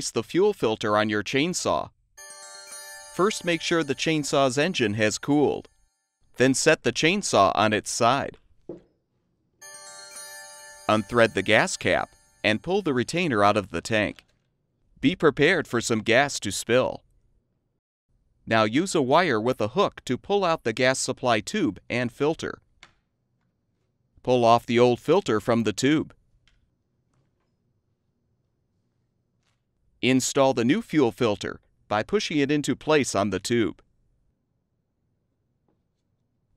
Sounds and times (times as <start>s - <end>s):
Speech: 0.0s - 1.9s, 3.2s - 5.7s, 6.4s - 8.4s, 10.9s - 14.2s, 15.0s - 17.0s, 18.5s - 22.6s, 24.3s - 26.2s, 30.0s - 33.8s.